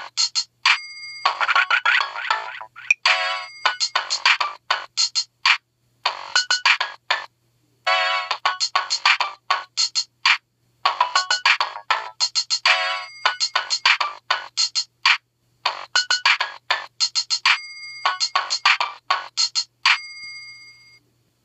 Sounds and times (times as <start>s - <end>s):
Music: 0.0s - 7.3s, 7.9s - 21.0s
Ringtone: 0.0s - 7.3s, 7.9s - 10.1s, 10.9s - 21.0s.